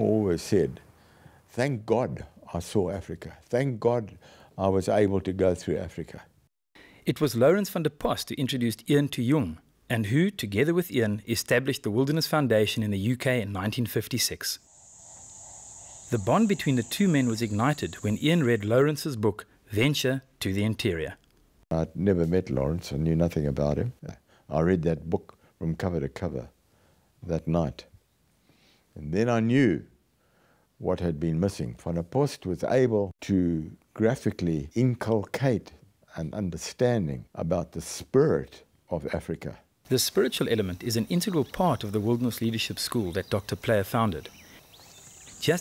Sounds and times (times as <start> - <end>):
Speech: 0.0 - 0.8, 1.5 - 6.3, 7.1 - 14.6, 16.1 - 26.6, 27.2 - 27.9, 29.0 - 30.0, 30.8 - 44.3, 45.4 - 45.6.